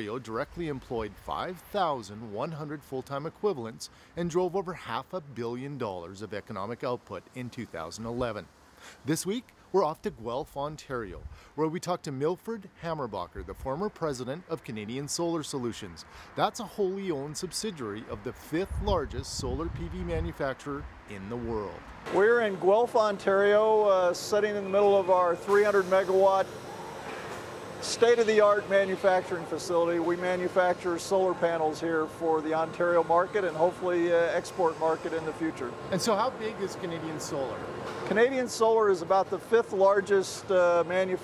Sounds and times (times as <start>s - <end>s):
Speech: 0.0s - 26.5s, 27.8s - 41.2s.